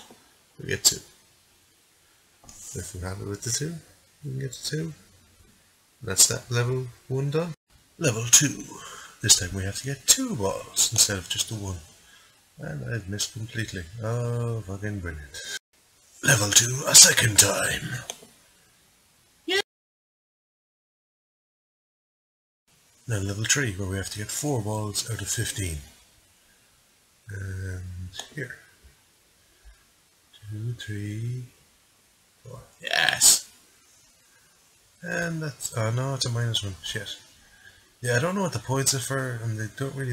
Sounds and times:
Speech: 0.0s - 1.1s, 2.5s - 5.1s, 6.0s - 11.9s, 12.6s - 15.6s, 16.2s - 18.2s, 23.1s - 26.0s, 27.3s - 28.8s, 30.4s - 31.6s, 32.5s - 33.6s, 35.0s - 37.3s, 38.0s - 40.1s.

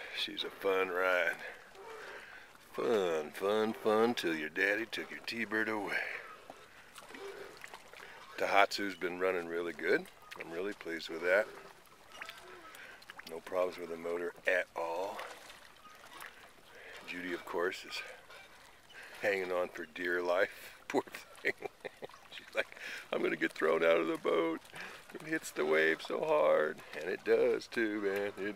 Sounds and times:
Speech: 0.2s - 1.5s, 2.7s - 6.2s, 8.4s - 11.6s, 13.3s - 15.3s, 17.1s - 18.1s, 19.2s - 21.2s, 22.4s - 28.5s.

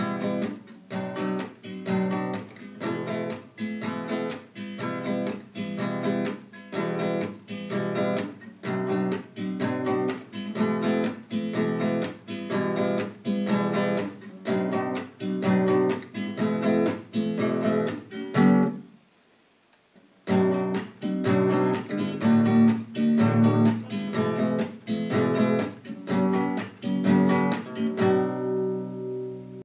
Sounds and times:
Music: 0.0s - 19.0s, 20.2s - 29.6s.

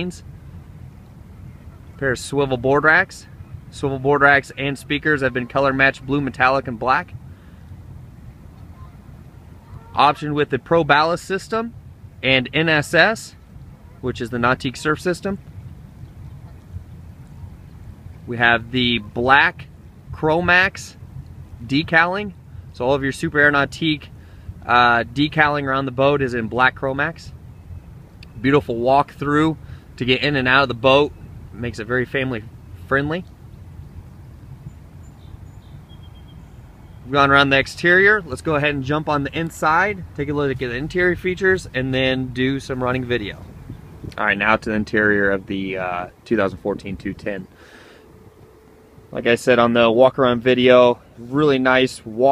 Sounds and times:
Speech: 0.0s - 0.2s, 2.0s - 7.2s, 9.9s - 13.4s, 14.0s - 15.4s, 18.3s - 21.0s, 21.6s - 27.3s, 28.4s - 33.3s, 37.1s - 43.5s, 44.2s - 47.5s, 49.2s - 52.3s.

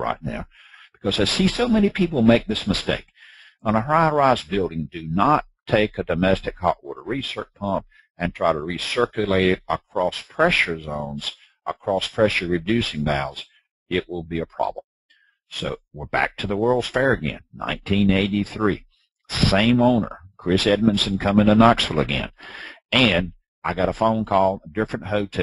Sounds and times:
Speech: 0.0s - 14.8s, 15.5s - 25.4s.

